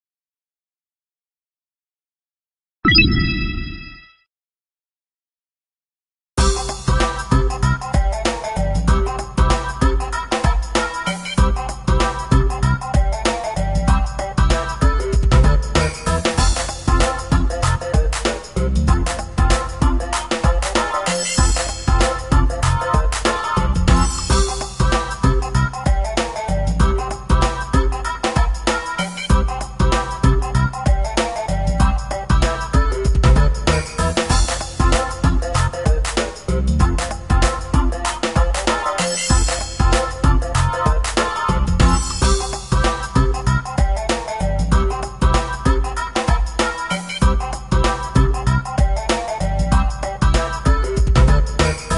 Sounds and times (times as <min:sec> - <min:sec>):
Music: 0:06.4 - 0:51.9.